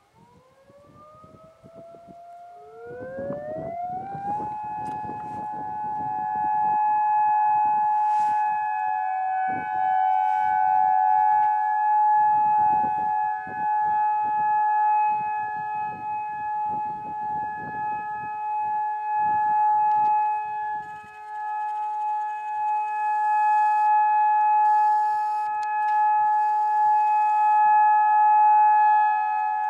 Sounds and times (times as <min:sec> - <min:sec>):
Civil defense siren: 0:00.0 - 0:29.7.